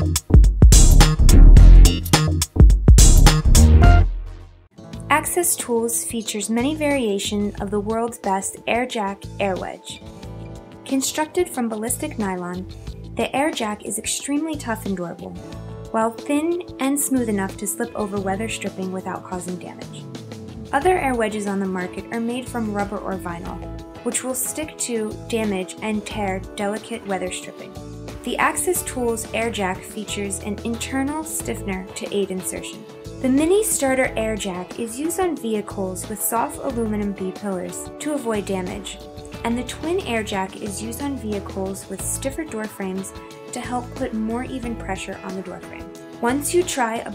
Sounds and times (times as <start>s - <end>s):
Music: 0.0s - 47.1s
Speech: 5.1s - 10.0s, 10.9s - 20.0s, 20.7s - 47.1s.